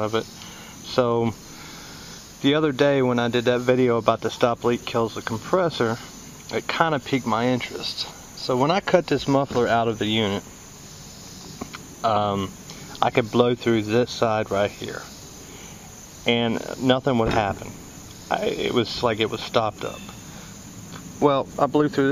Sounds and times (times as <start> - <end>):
Speech: 0.0 - 0.3, 0.9 - 1.4, 2.4 - 10.5, 12.0 - 15.1, 16.3 - 20.2, 21.2 - 22.1.